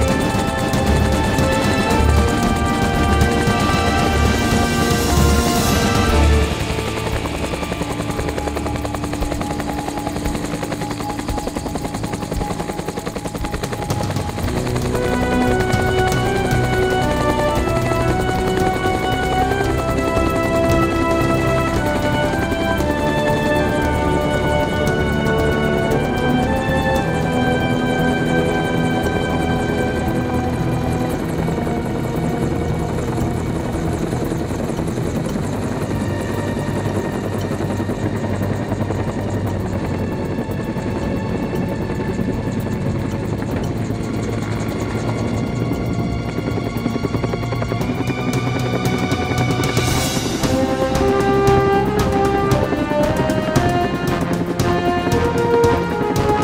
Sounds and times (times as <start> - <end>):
Helicopter: 0.0 - 56.4
Music: 0.0 - 56.4.